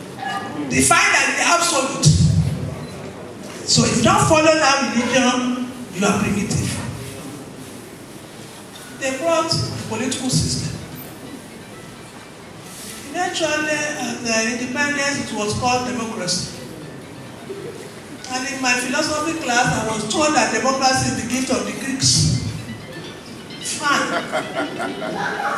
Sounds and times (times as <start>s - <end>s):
Music: 9.6s - 25.5s.